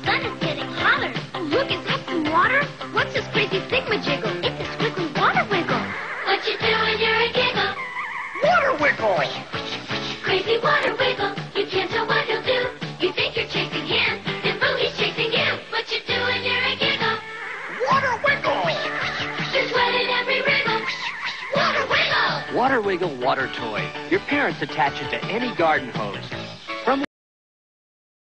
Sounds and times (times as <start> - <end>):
Music: 0.0 - 27.1
Speech: 22.5 - 26.2, 26.9 - 27.1.